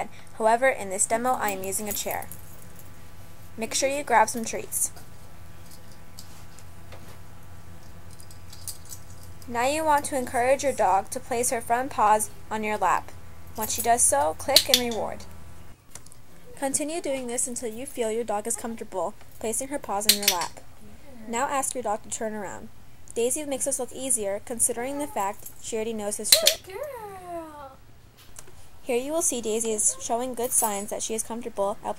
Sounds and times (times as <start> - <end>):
Speech: 0.0 - 2.3, 3.6 - 4.9, 9.5 - 15.2, 16.6 - 27.8, 28.9 - 31.9.